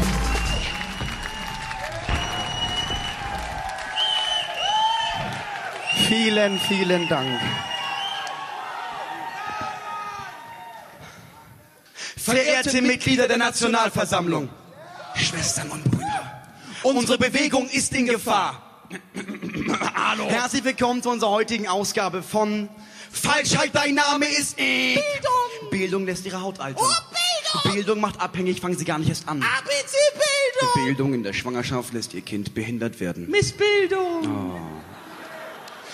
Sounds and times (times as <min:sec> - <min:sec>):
Speech: 0:06.0 - 0:07.5, 0:12.2 - 0:14.5, 0:16.8 - 0:18.6, 0:19.9 - 0:34.9.